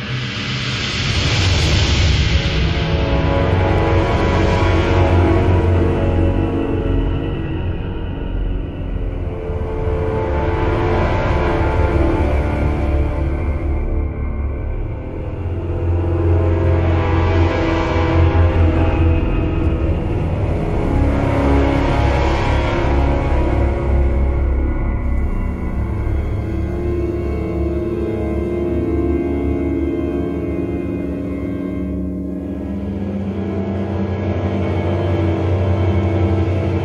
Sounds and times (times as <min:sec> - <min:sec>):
Music: 0:00.0 - 0:36.8.